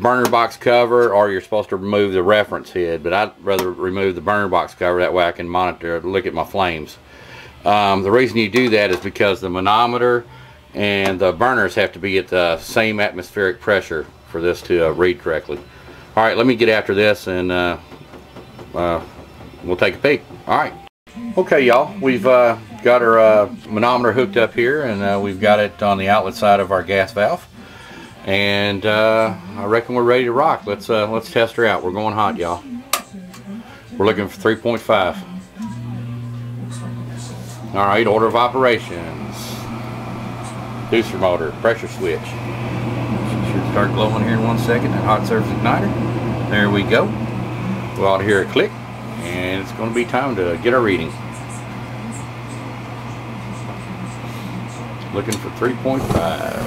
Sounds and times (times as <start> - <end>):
Speech: 0.0 - 7.0, 7.6 - 17.8, 18.7 - 39.8, 40.4 - 56.6
Music: 2.1 - 45.4, 46.1 - 56.6.